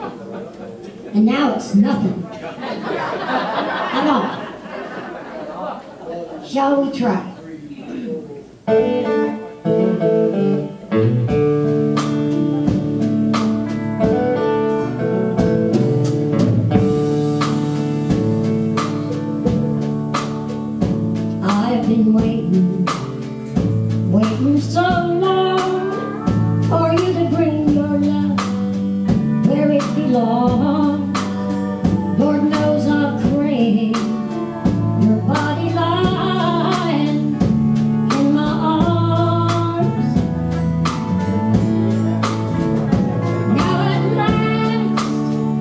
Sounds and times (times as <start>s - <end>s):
Country: 8.7s - 45.6s.